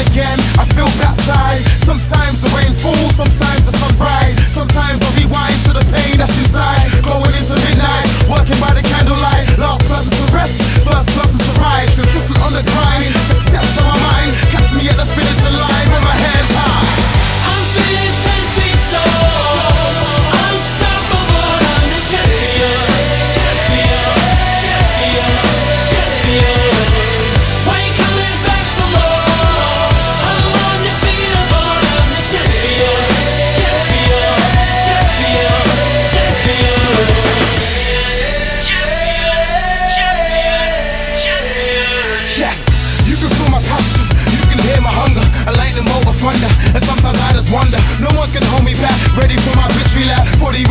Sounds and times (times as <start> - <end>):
Punk rock: 0.0 - 50.7.